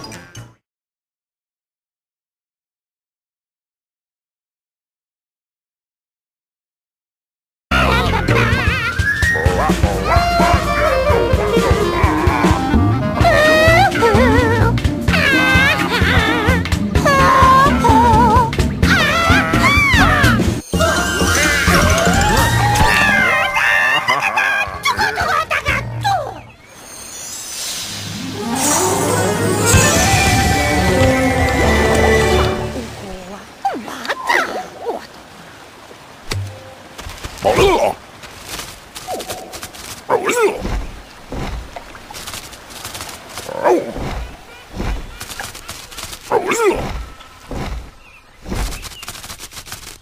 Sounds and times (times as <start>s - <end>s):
Music: 0.0s - 0.6s, 7.7s - 23.1s, 28.0s - 33.1s.